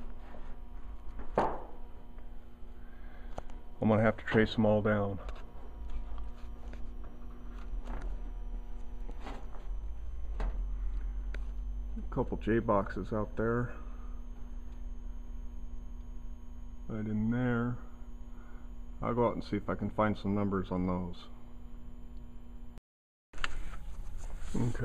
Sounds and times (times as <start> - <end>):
Speech: 3.8 - 5.3, 12.0 - 13.8, 16.9 - 17.9, 19.0 - 21.4, 24.5 - 24.8.